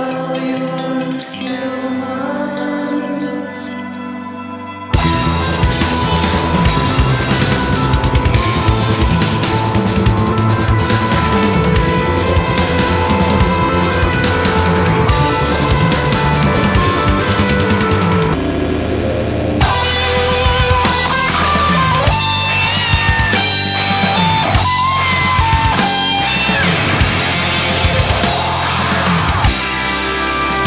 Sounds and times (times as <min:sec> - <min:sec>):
Heavy metal: 0:00.0 - 0:30.6.